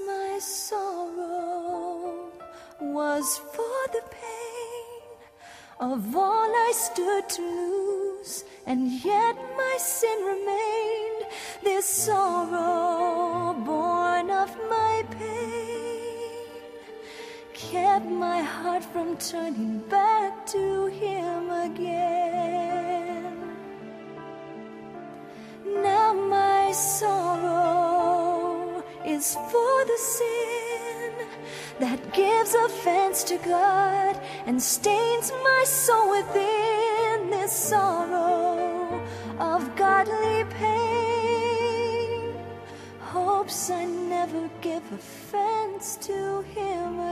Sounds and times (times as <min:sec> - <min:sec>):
Soul music: 0:00.0 - 0:47.1.